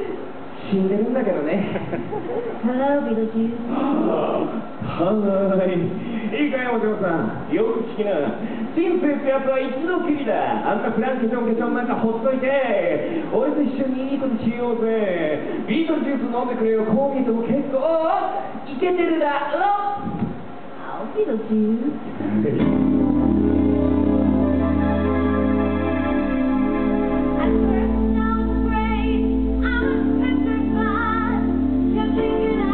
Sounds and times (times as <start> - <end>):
Music: 22.3 - 32.7.